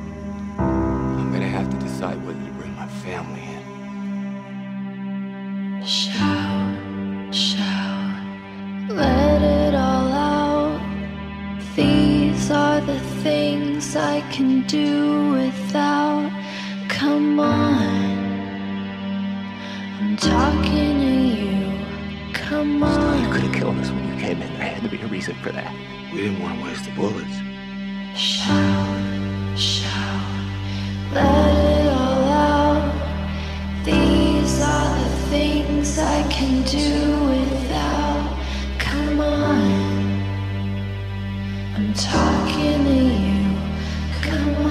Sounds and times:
Music: 0.0s - 44.7s.

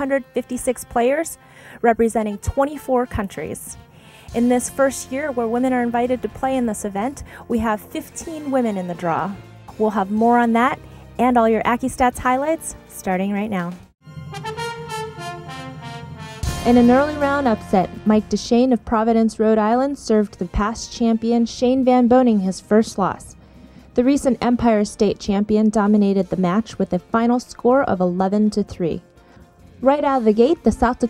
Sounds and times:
Speech: 0.0s - 13.8s, 16.6s - 23.4s, 24.0s - 29.0s, 29.8s - 31.1s
Music: 0.0s - 31.1s.

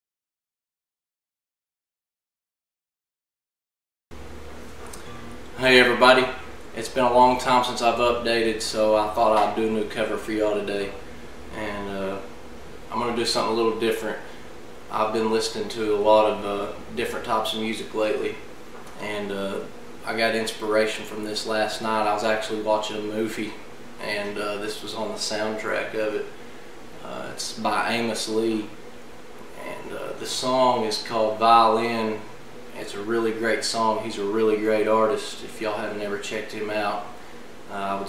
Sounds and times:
Speech: 5.0s - 12.3s, 12.9s - 14.3s, 14.9s - 26.4s, 27.0s - 28.8s, 29.6s - 38.0s.

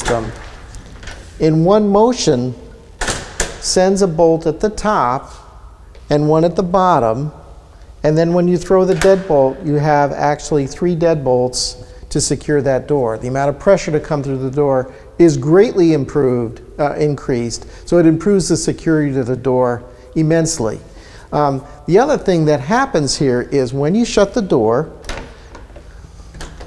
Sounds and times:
Speech: 0.0s - 0.4s, 1.4s - 2.6s, 3.6s - 5.4s, 6.1s - 7.4s, 8.0s - 24.9s.

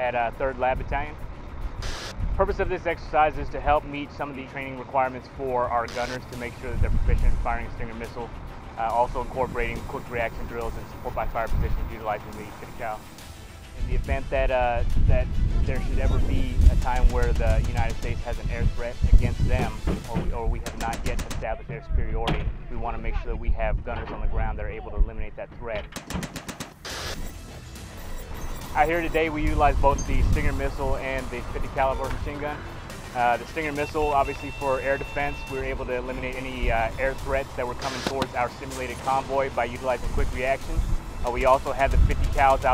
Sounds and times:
Speech: 0.0s - 1.2s, 2.4s - 13.0s, 13.8s - 25.9s, 28.8s - 32.6s, 33.2s - 42.7s.

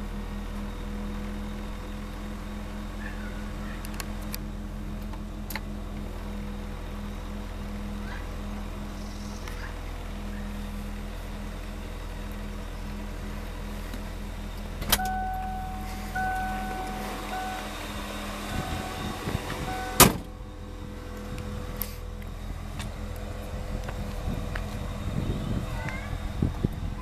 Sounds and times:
Vehicle: 0.0s - 27.0s.

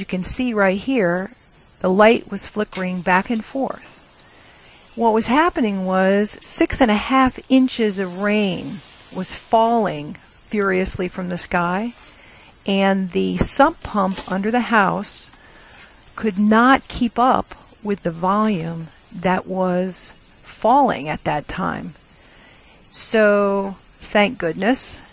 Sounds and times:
Speech: 0.0s - 3.9s, 5.0s - 12.0s, 12.7s - 15.3s, 16.2s - 21.9s, 23.0s - 25.1s.

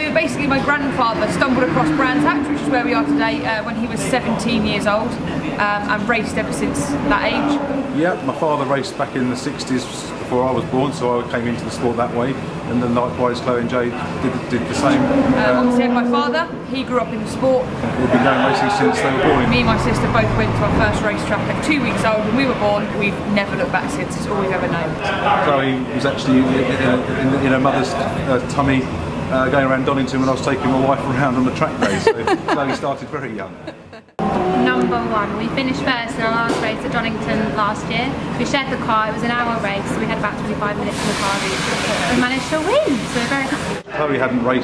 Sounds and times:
Race car, auto racing: 0.0s - 8.2s, 13.1s - 24.2s.

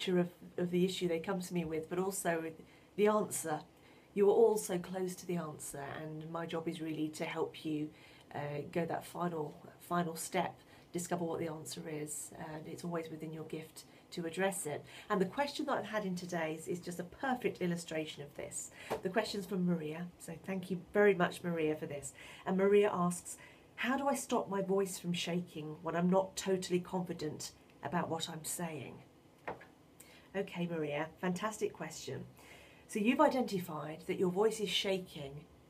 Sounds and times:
Speech: 0.0s - 29.0s, 30.3s - 32.3s, 32.9s - 35.5s.

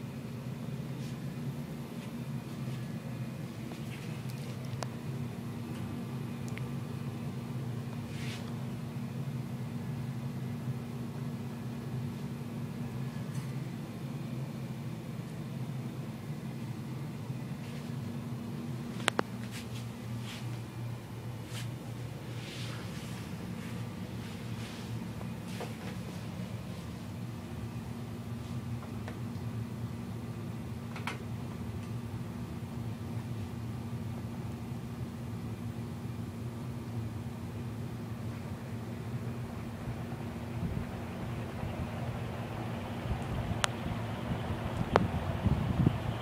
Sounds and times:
Mechanical fan: 0.0s - 46.2s.

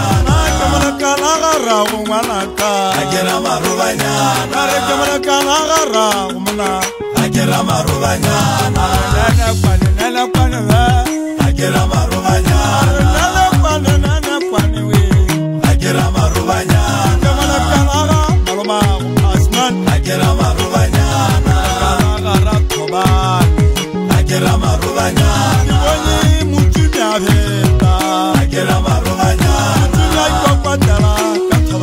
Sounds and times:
Traditional music: 0.0s - 31.8s.

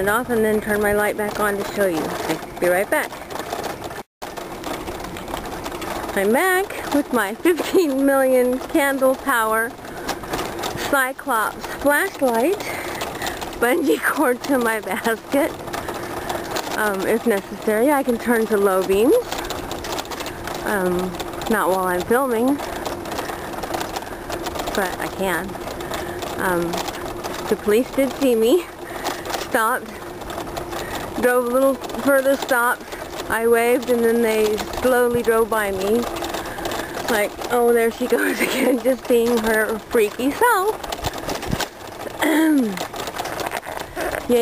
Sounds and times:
Speech: 0.0s - 3.1s, 6.2s - 9.7s, 10.8s - 12.7s, 13.6s - 15.5s, 16.8s - 19.3s, 20.6s - 22.6s, 24.7s - 25.5s, 26.4s - 26.8s, 27.5s - 28.7s, 29.5s - 30.0s, 31.2s - 36.1s, 37.1s - 40.8s
Bicycle: 0.0s - 44.4s.

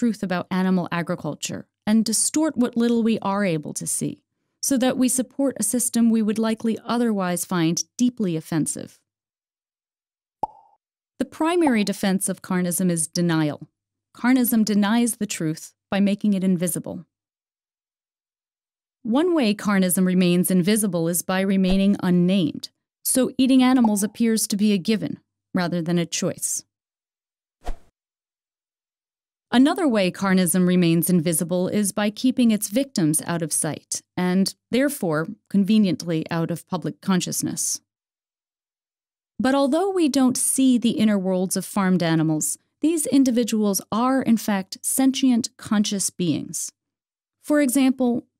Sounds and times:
Speech: 0.0s - 9.0s, 11.2s - 17.1s, 19.1s - 26.7s, 29.5s - 37.9s, 39.4s - 46.8s, 47.4s - 48.3s.

